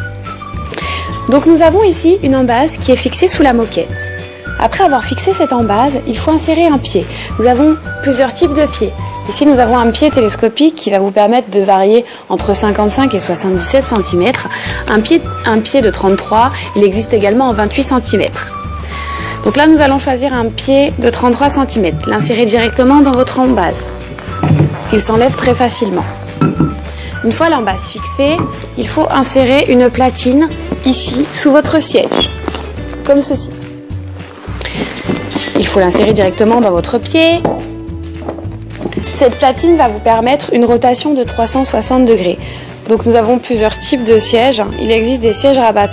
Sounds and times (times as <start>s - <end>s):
Music: 0.0s - 45.9s
Speech: 1.3s - 18.5s, 19.4s - 23.9s, 24.9s - 26.1s, 27.2s - 32.3s, 33.0s - 33.6s, 35.6s - 37.5s, 39.1s - 45.9s.